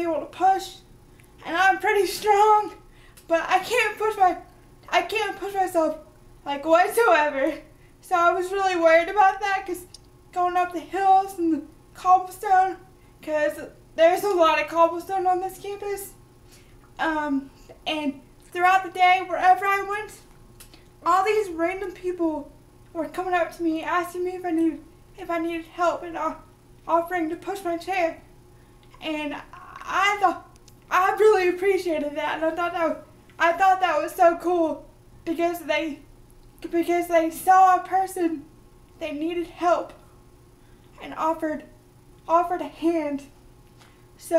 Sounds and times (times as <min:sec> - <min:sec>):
Speech: 0:00.0 - 0:16.2, 0:17.0 - 0:20.3, 0:21.0 - 0:28.3, 0:29.0 - 0:40.0, 0:41.0 - 0:43.4.